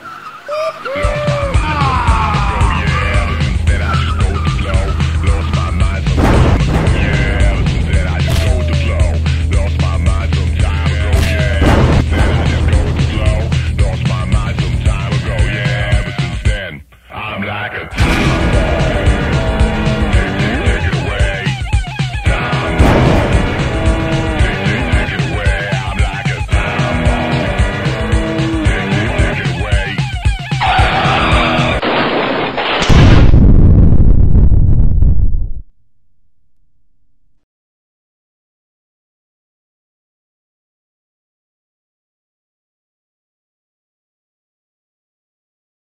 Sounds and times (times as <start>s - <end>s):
Music: 0.0s - 31.8s
Speech: 16.0s - 18.0s.